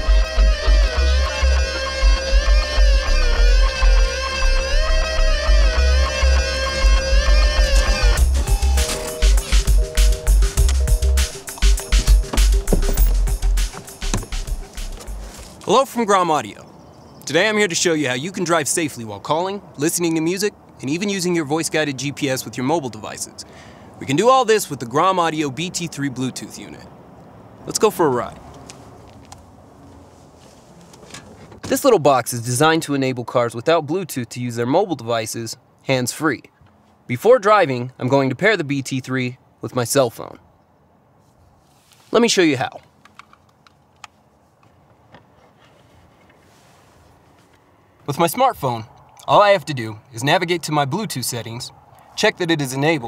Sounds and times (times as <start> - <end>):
Speech: 15.7 - 23.4, 24.0 - 26.9, 27.7 - 28.4, 31.7 - 36.5, 37.1 - 40.4, 42.1 - 42.8, 48.1 - 53.0.